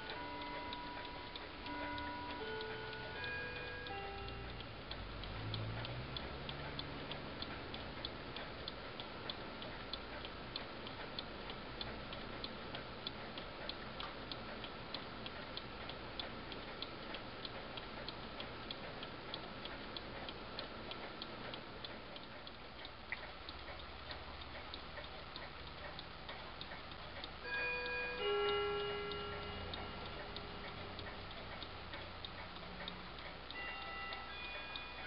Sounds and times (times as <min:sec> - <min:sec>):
Tick-tock: 0:00.0 - 0:35.0.